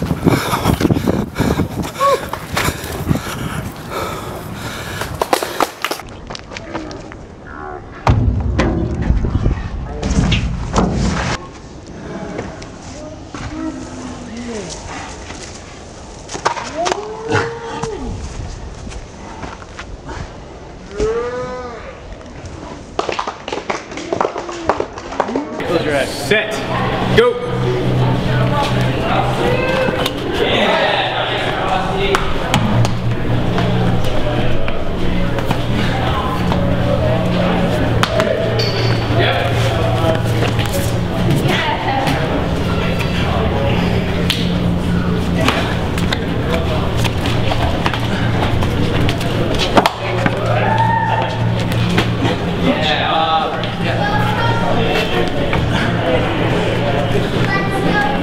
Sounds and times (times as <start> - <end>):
Run: 0.0 - 7.2, 10.4 - 20.7, 22.0 - 25.6, 45.4 - 52.5.